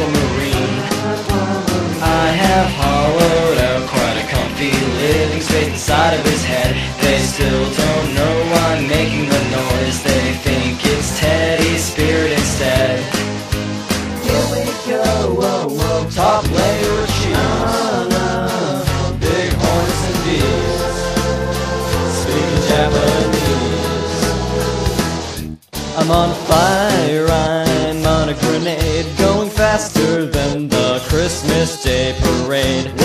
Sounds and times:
Music: 0:00.0 - 0:33.0.

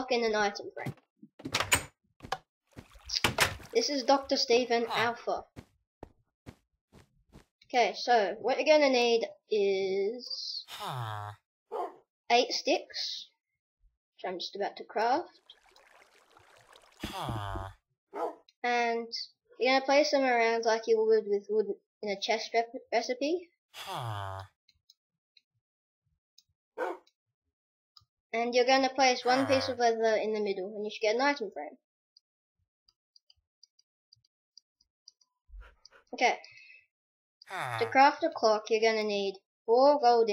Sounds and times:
Speech: 0:00.0 - 0:00.9, 0:03.8 - 0:05.5, 0:07.7 - 0:10.7, 0:12.3 - 0:13.3, 0:14.2 - 0:15.3, 0:18.6 - 0:23.4, 0:28.4 - 0:31.8, 0:36.2 - 0:36.5, 0:37.5 - 0:40.3.

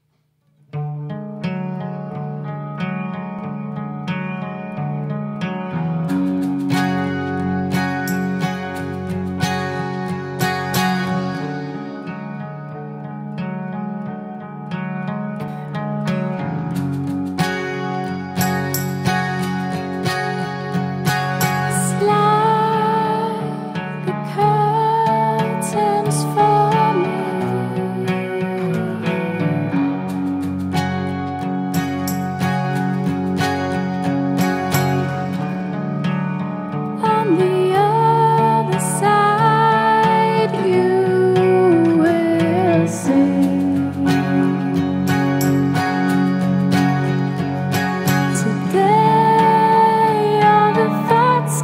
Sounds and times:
Music: 0:00.0 - 0:51.6.

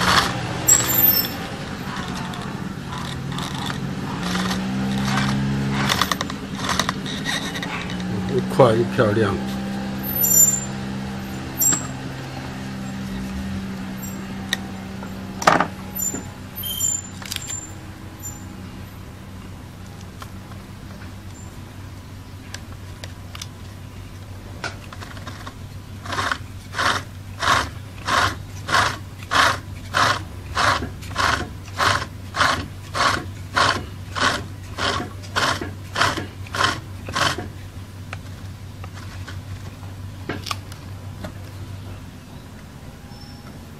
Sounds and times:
Wood: 0:01.9 - 0:08.5, 0:14.5 - 0:16.3, 0:24.6 - 0:37.6.

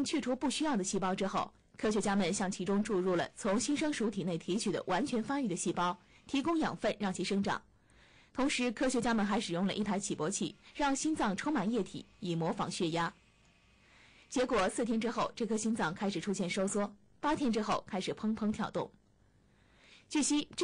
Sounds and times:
Speech: 0:00.0 - 0:07.7, 0:08.4 - 0:13.2, 0:14.3 - 0:19.0, 0:20.1 - 0:20.6.

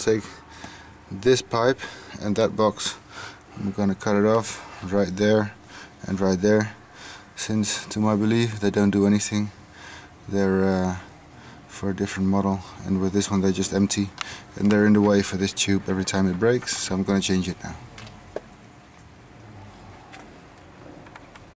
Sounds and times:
Speech: 0:00.0 - 0:00.4, 0:01.1 - 0:03.0, 0:03.6 - 0:06.8, 0:07.4 - 0:09.6, 0:10.3 - 0:11.1, 0:11.7 - 0:17.9.

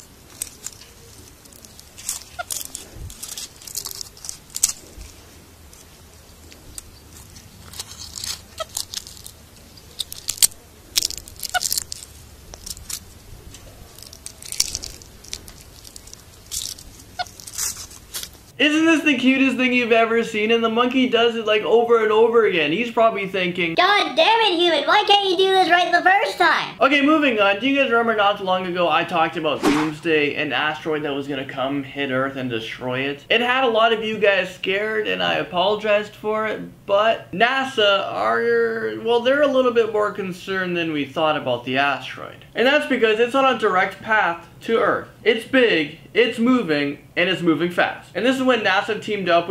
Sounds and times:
Outside, rural or natural: 0:00.0 - 0:18.6.

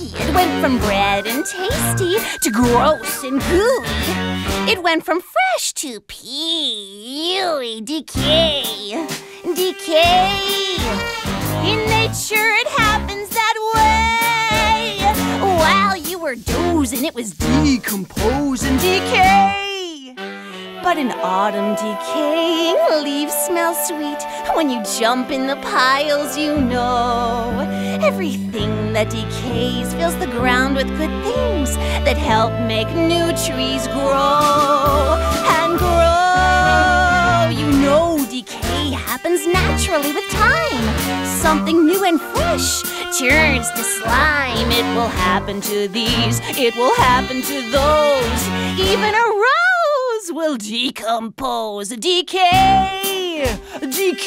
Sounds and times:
Music: 0:00.0 - 0:05.6, 0:07.3 - 0:49.8, 0:52.3 - 0:54.2.

